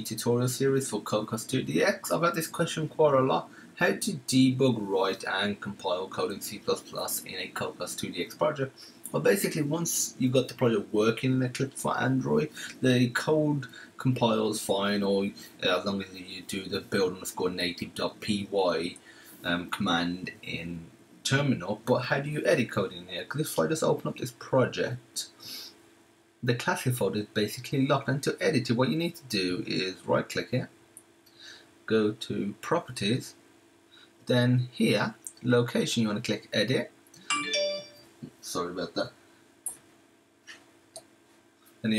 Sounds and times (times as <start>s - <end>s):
Speech: 0.0s - 25.5s, 26.4s - 30.8s, 31.9s - 33.4s, 34.3s - 36.9s, 38.2s - 39.2s.